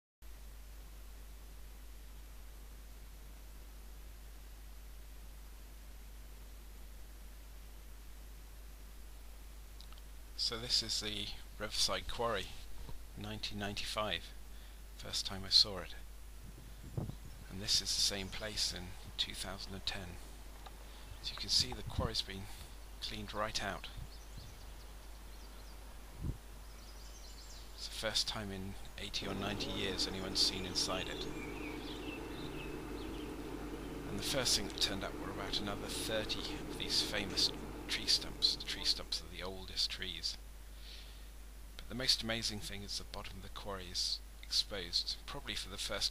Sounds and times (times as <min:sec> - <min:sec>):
Speech: 0:10.4 - 0:12.6, 0:13.2 - 0:14.4, 0:15.0 - 0:16.1, 0:17.5 - 0:20.2, 0:21.2 - 0:24.0, 0:27.8 - 0:32.9, 0:34.0 - 0:40.4, 0:41.8 - 0:46.1.